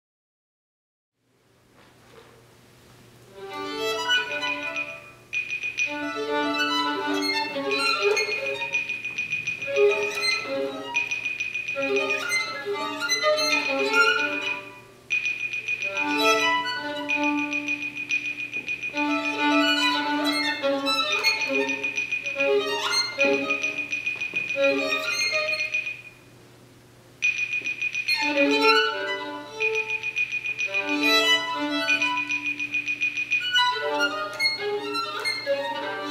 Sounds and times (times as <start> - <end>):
Violin, fiddle: 3.4 - 5.0, 5.9 - 8.6, 11.8 - 14.8, 19.0 - 21.7, 28.2 - 29.7, 30.7 - 32.3, 33.6 - 36.1.